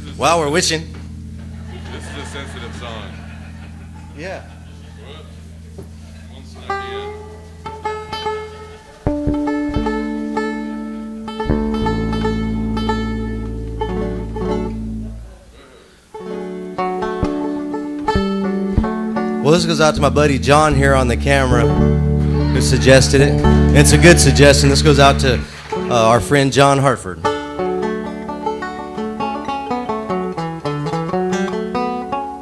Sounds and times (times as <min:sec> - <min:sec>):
Music: 0:00.0 - 0:15.4, 0:16.1 - 0:32.4.